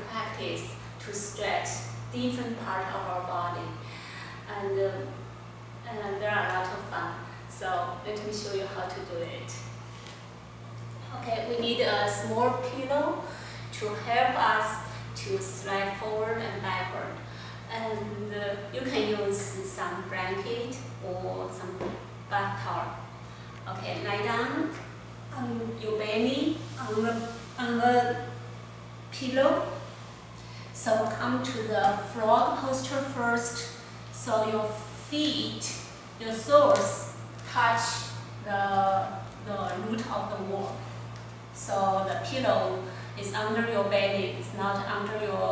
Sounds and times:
Speech: 0:00.0 - 0:03.8, 0:04.5 - 0:05.2, 0:05.8 - 0:09.7, 0:11.0 - 0:23.0, 0:23.7 - 0:28.3, 0:29.1 - 0:29.8, 0:30.8 - 0:40.8, 0:41.6 - 0:45.5.

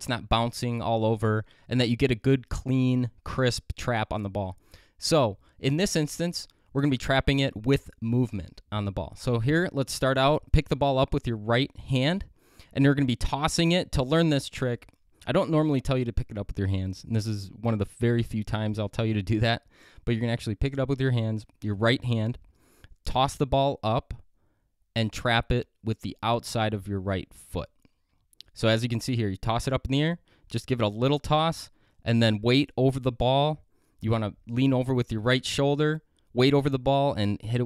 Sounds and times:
Speech: 0:00.0 - 0:22.4, 0:23.0 - 0:24.2, 0:25.0 - 0:27.8, 0:28.4 - 0:37.6.

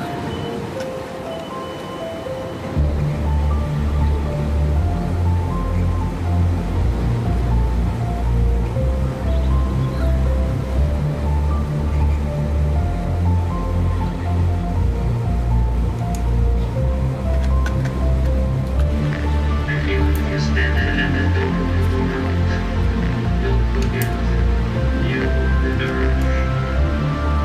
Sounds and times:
Music: 0:00.0 - 0:27.4.

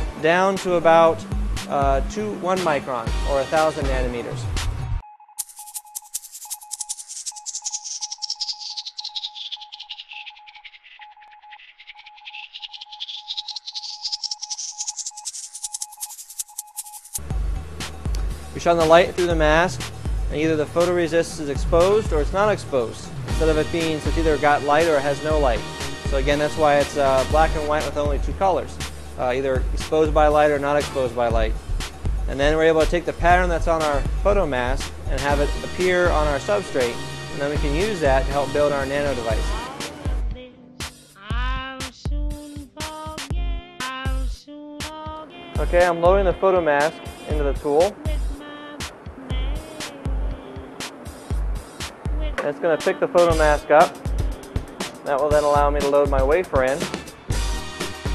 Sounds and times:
Music: 0:00.0 - 0:08.2, 0:16.4 - 0:58.1
Speech: 0:00.2 - 0:04.4, 0:18.6 - 0:25.6, 0:26.2 - 0:31.5, 0:32.3 - 0:39.6, 0:45.6 - 0:48.0, 0:52.4 - 0:53.9, 0:55.1 - 0:56.8.

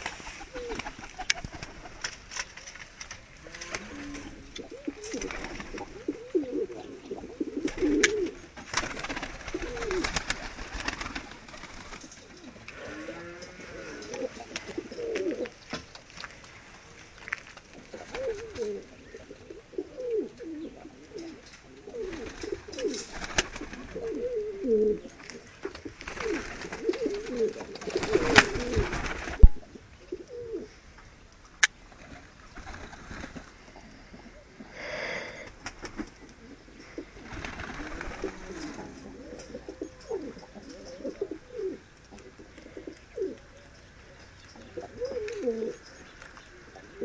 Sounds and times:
Pigeon, dove: 0:00.0 - 0:02.9, 0:03.6 - 0:16.3, 0:17.8 - 0:30.7, 0:35.4 - 0:47.0.

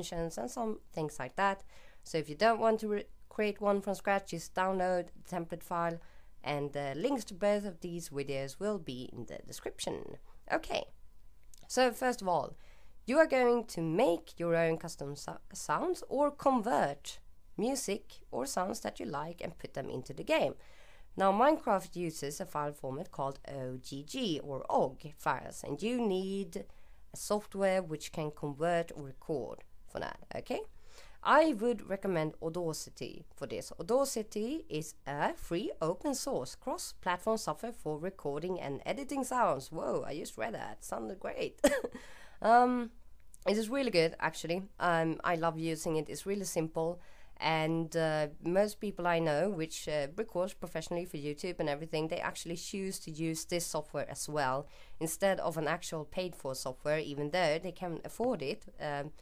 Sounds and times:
Speech: 0:00.0 - 0:10.9, 0:11.6 - 0:20.6, 0:21.2 - 0:41.8, 0:42.4 - 0:59.1.

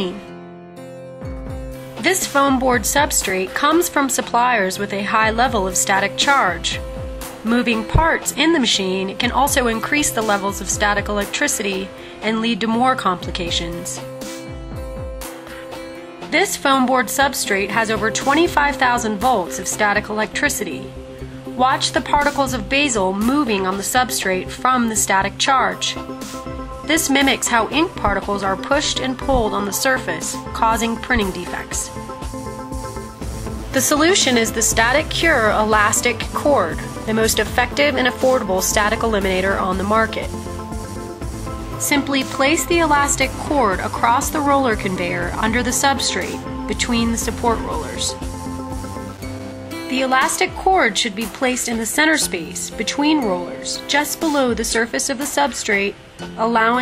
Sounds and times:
Speech: 0:00.0 - 0:00.2, 0:02.0 - 0:06.8, 0:07.4 - 0:14.0, 0:16.3 - 0:20.9, 0:21.6 - 0:26.0, 0:26.9 - 0:31.9, 0:33.8 - 0:40.3, 0:41.8 - 0:48.2, 0:49.9 - 0:56.8
Music: 0:00.0 - 0:56.8.

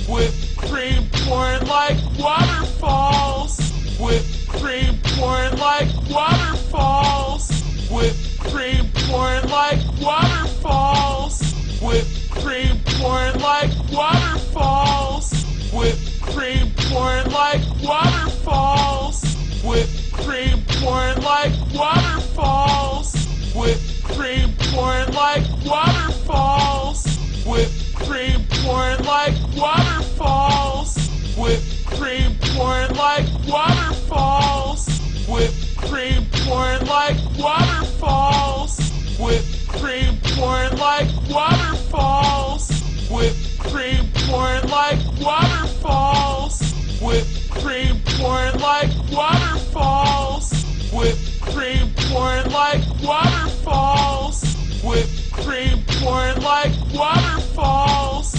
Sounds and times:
Music: 0:00.0 - 0:58.3
Speech: 0:00.0 - 0:58.3.

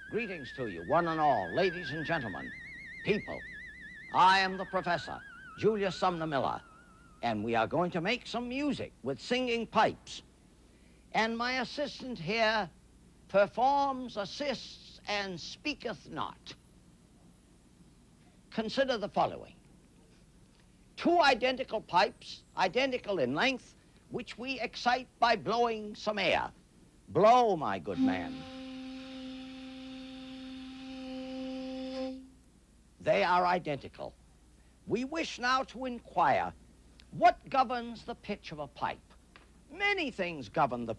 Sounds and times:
Speech: 0:00.1 - 0:02.5, 0:03.1 - 0:03.4, 0:04.2 - 0:06.6, 0:07.2 - 0:10.3, 0:11.1 - 0:16.6, 0:18.5 - 0:19.6, 0:21.0 - 0:28.4, 0:33.0 - 0:34.2, 0:34.9 - 0:40.9.

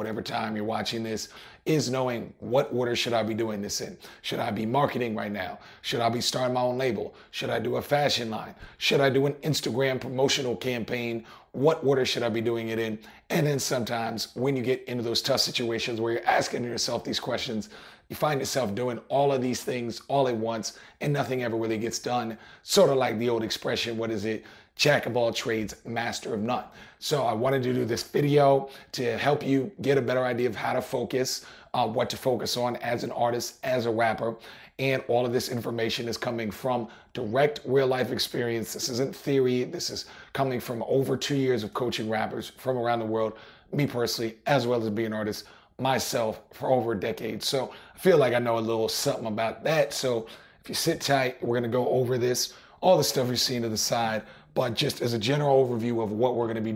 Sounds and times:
Speech: 0:00.0 - 0:56.7.

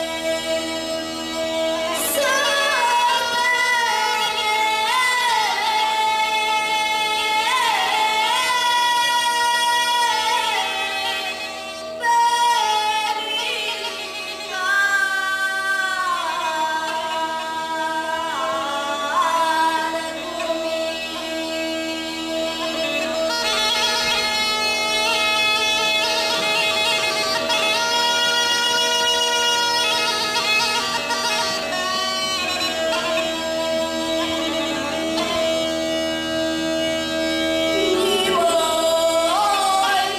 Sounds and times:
Bagpipes: 0:00.0 - 0:40.1
Wind instrument, woodwind instrument: 0:00.0 - 0:40.1.

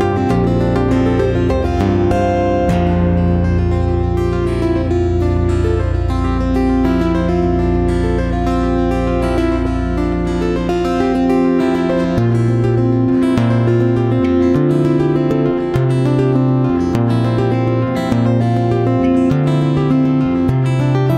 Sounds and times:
Acoustic guitar: 0:00.0 - 0:21.1.

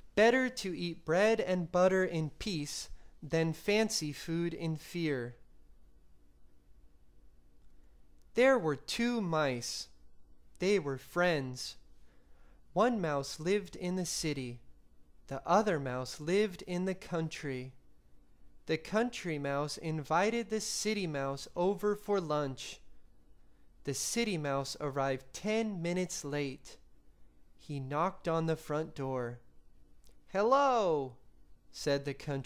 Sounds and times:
Speech: 0:00.1 - 0:05.4, 0:08.4 - 0:10.0, 0:10.6 - 0:11.8, 0:12.8 - 0:14.7, 0:15.3 - 0:17.8, 0:18.7 - 0:22.9, 0:23.8 - 0:26.8, 0:27.6 - 0:29.5, 0:30.3 - 0:32.4.

